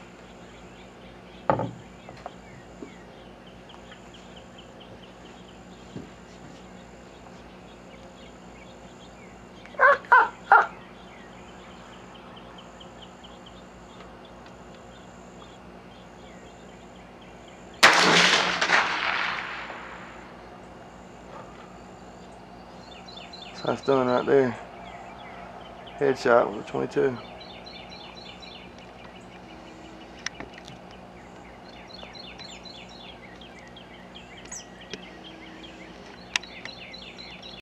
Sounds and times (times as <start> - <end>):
Bird: 0.0 - 17.8, 21.3 - 37.6.